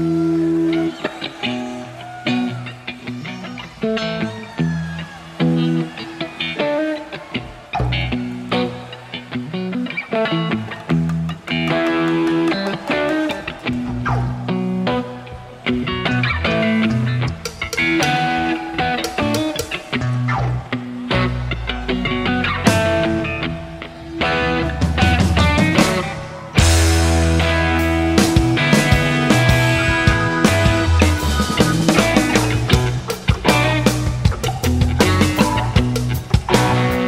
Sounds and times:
Music: 0.0s - 37.0s.

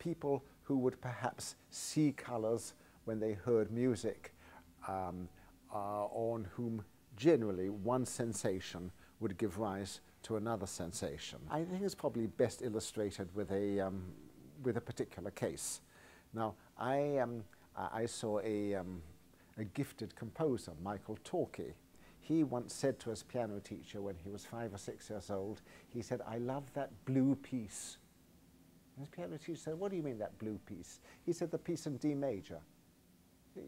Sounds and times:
Speech: 0.0s - 28.1s, 29.0s - 32.7s.

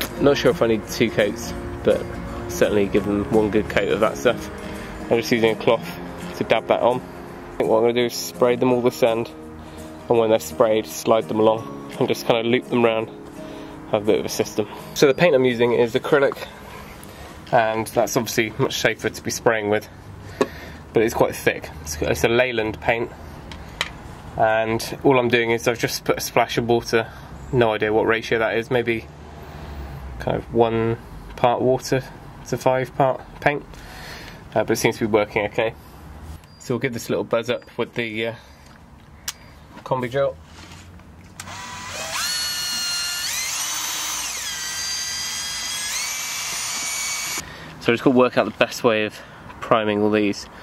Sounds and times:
Speech: 0.1s - 4.5s, 5.1s - 7.0s, 7.6s - 9.3s, 10.1s - 13.1s, 13.9s - 16.5s, 17.5s - 19.9s, 21.0s - 23.2s, 24.4s - 29.1s, 30.2s - 33.7s, 34.6s - 35.8s, 36.6s - 38.4s, 39.8s - 40.4s, 47.8s - 50.5s.

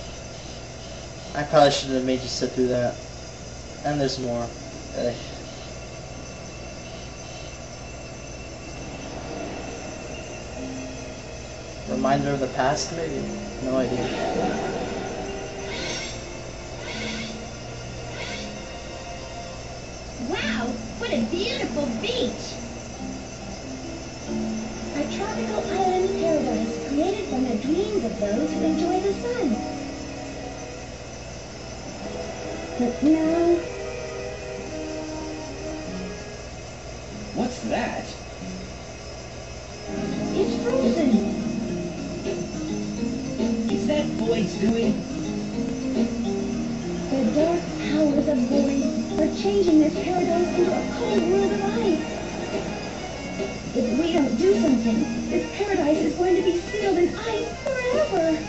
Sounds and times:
Music: 3.9s - 58.4s.

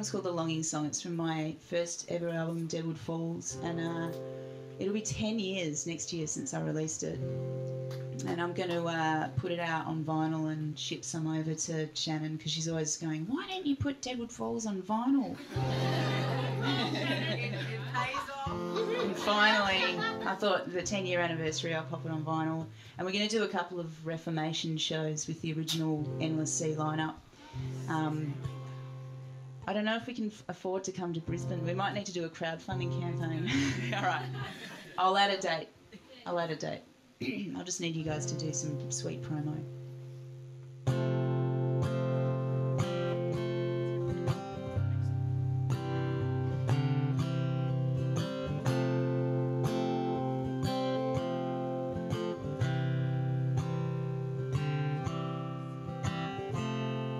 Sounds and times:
Music: 0.0s - 12.0s, 15.4s - 30.2s, 31.0s - 34.6s, 38.0s - 57.1s.

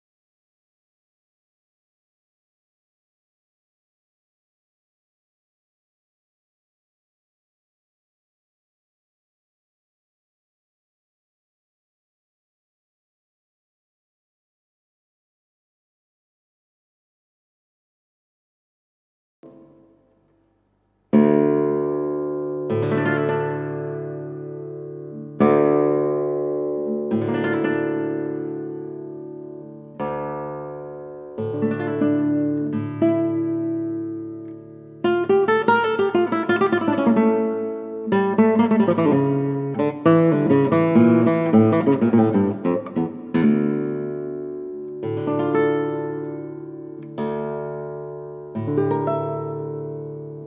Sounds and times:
Electronic tuner: 19.4s - 50.4s
Guitar: 19.4s - 50.4s
Inside, small room: 19.4s - 50.4s.

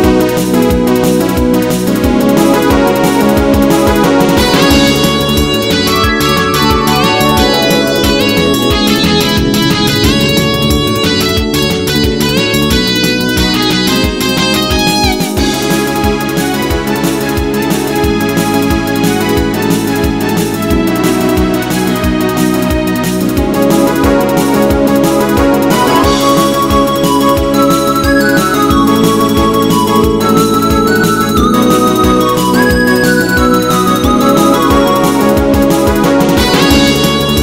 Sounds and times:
Music: 0.0s - 37.4s.

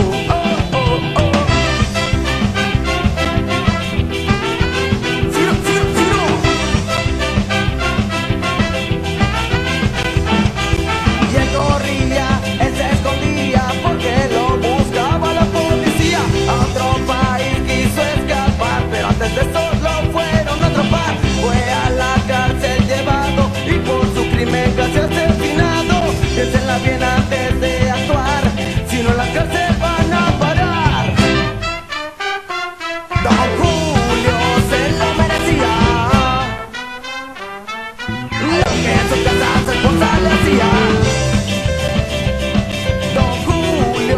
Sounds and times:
Ska: 0.0s - 44.1s.

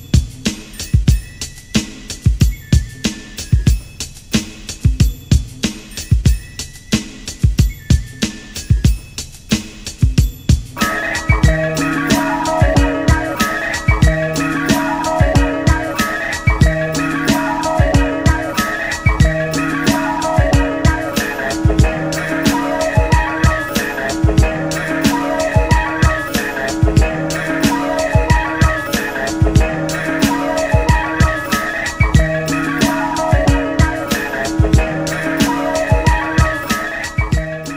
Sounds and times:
Music: 0.0s - 37.7s.

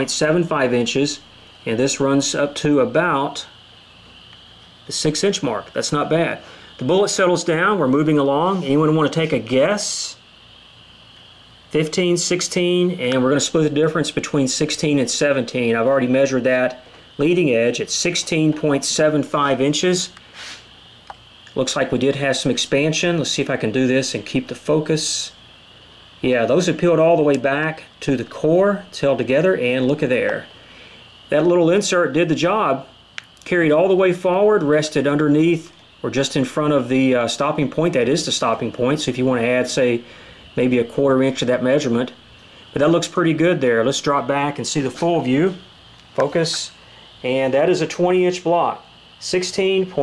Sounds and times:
Speech: 0.0s - 3.6s, 4.9s - 10.2s, 11.7s - 20.2s, 21.5s - 25.4s, 26.2s - 30.5s, 31.3s - 42.2s, 42.8s - 50.0s.

